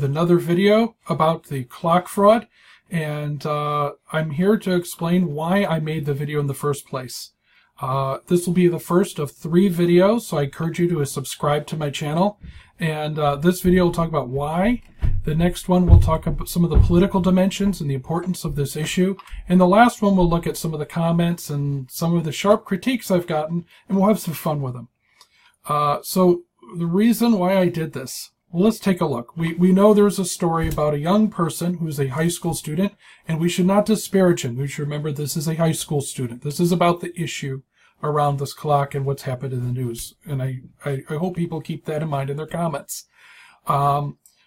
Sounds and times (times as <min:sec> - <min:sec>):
Speech: 0:00.0 - 0:24.9, 0:25.6 - 0:44.3.